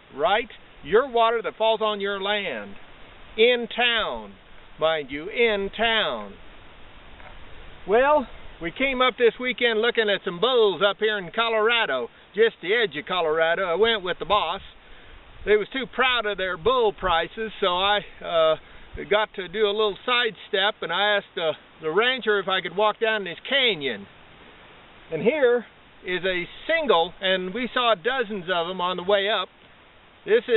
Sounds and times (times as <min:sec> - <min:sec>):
Speech: 0:00.2 - 0:02.8, 0:03.4 - 0:06.4, 0:07.9 - 0:14.8, 0:15.5 - 0:24.1, 0:25.1 - 0:29.5, 0:30.3 - 0:30.5.